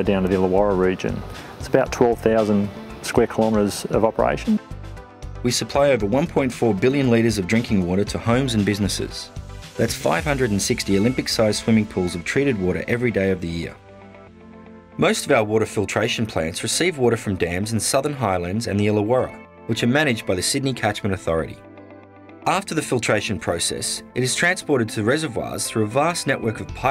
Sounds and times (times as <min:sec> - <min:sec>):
Speech: 0:00.0 - 0:04.6, 0:05.5 - 0:13.8, 0:15.0 - 0:21.6, 0:22.4 - 0:26.9
Music: 0:00.0 - 0:26.9.